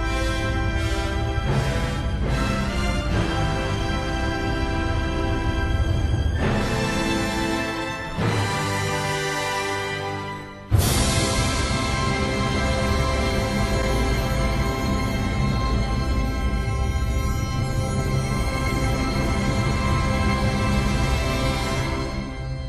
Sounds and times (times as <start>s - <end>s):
Music: 0.0s - 22.6s.